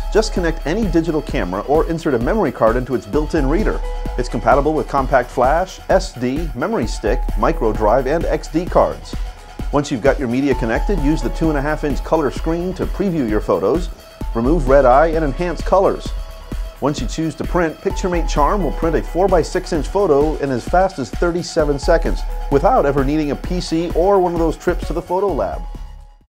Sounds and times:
Music: 0.0s - 26.3s
Speech: 0.1s - 16.1s, 16.8s - 25.6s.

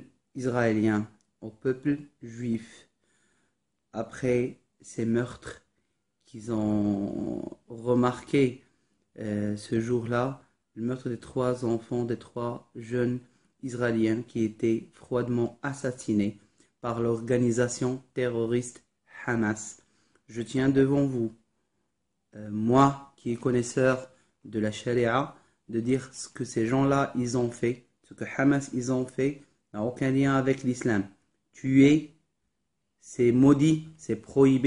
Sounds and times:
Speech: 0.0s - 2.9s, 4.0s - 21.4s, 22.4s - 32.2s, 33.0s - 34.6s.

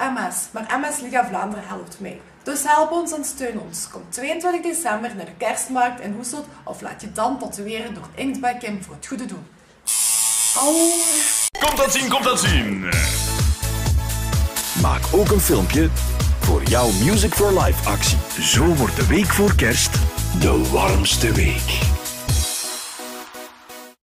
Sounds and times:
Speech: 0.0s - 9.5s, 10.6s - 13.2s, 14.8s - 21.9s
Background music: 11.6s - 24.0s.

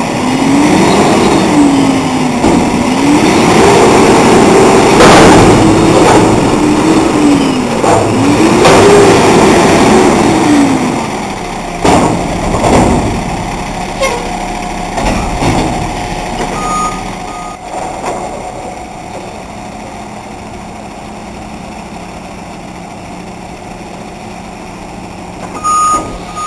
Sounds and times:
Reversing beeps: 16.5s - 17.6s, 25.6s - 26.4s.

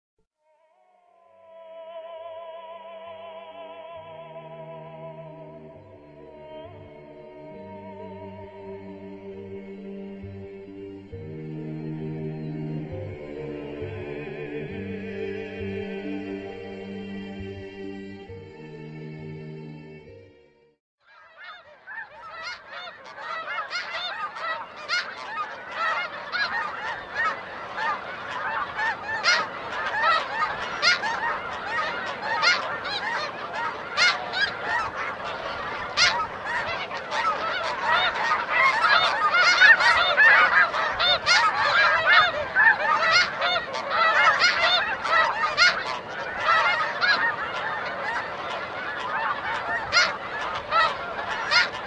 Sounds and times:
Honk: 21.0s - 51.8s.

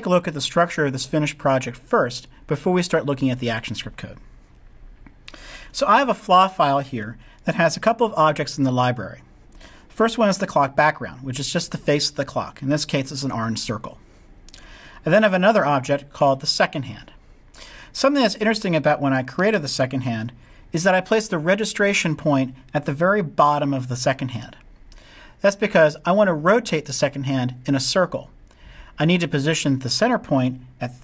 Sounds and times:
Speech: 0.0s - 4.2s, 5.7s - 9.3s, 9.9s - 14.0s, 15.0s - 17.2s, 17.9s - 24.6s, 25.4s - 28.4s, 29.0s - 31.0s.

